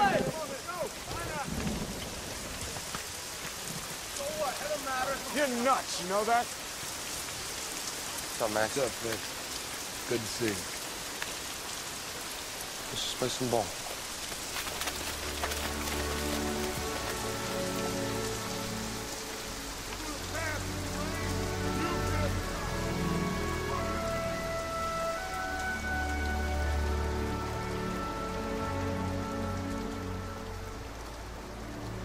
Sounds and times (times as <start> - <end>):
Raindrop: 0.0 - 32.0.